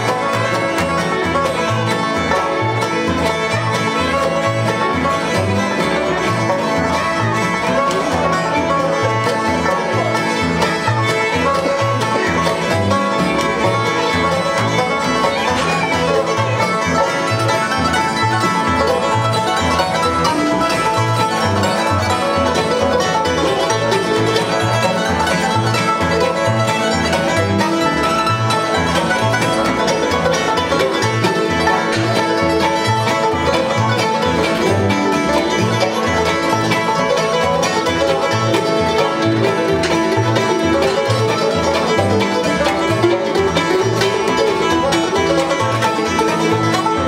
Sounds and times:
Bluegrass: 0.0 - 47.0.

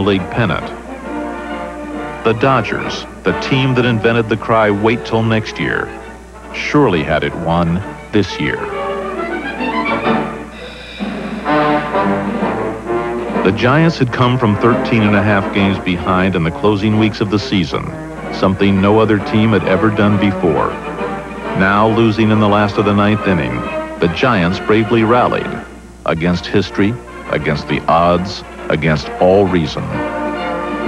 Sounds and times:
Speech: 0.0 - 0.8, 2.3 - 8.7, 13.4 - 20.8, 21.6 - 30.1
Music: 0.0 - 30.8.

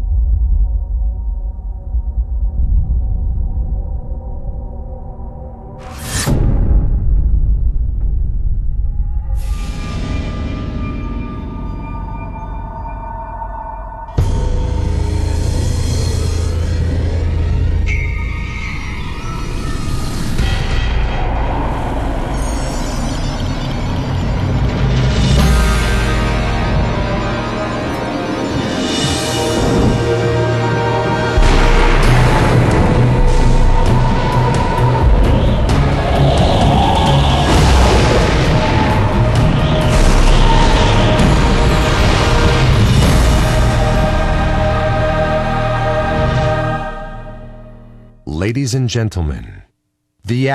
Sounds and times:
Music: 0.0 - 48.3.

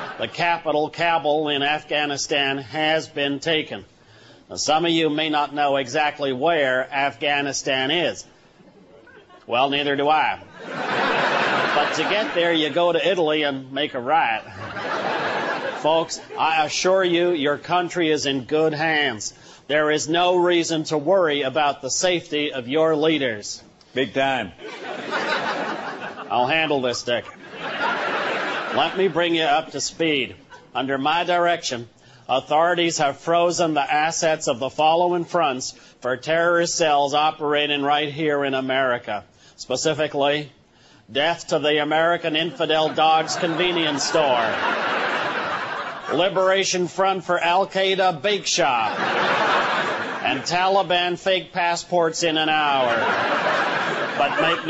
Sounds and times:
Speech: 0.2 - 3.9, 4.5 - 8.3, 9.5 - 10.5, 11.8 - 14.5, 15.8 - 24.6, 26.3 - 27.4, 28.7 - 44.6, 46.1 - 49.0, 50.2 - 53.1, 54.2 - 54.6.

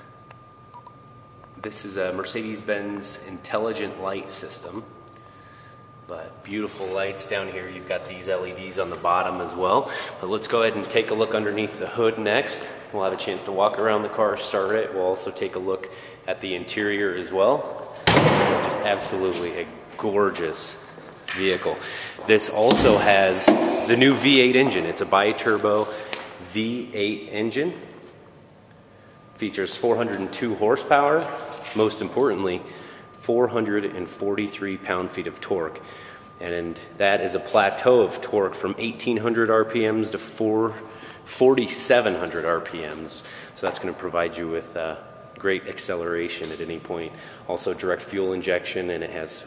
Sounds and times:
Speech: 1.6 - 4.9, 6.1 - 17.8, 18.4 - 27.9, 29.4 - 49.4.

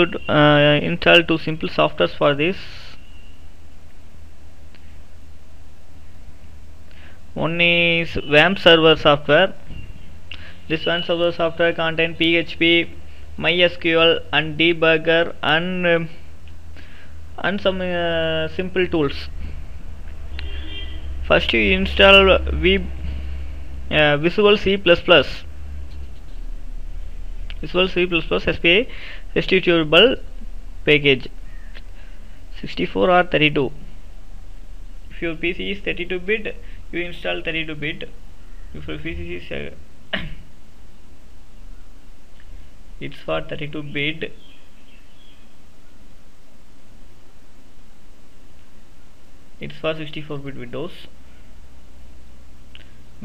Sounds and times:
Speech: 0.0 - 3.0, 7.4 - 9.6, 10.7 - 16.2, 17.4 - 19.4, 21.2 - 23.0, 23.9 - 25.4, 27.5 - 31.4, 32.5 - 33.8, 35.1 - 38.2, 38.8 - 40.3, 43.0 - 44.4, 49.6 - 51.2.

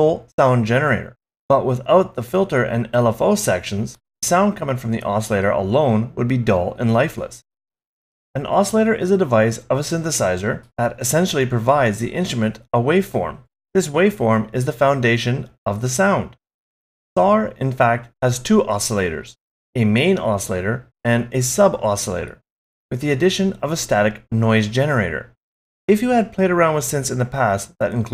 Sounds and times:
Speech: 0.0 - 7.4, 8.4 - 16.4, 17.2 - 28.1.

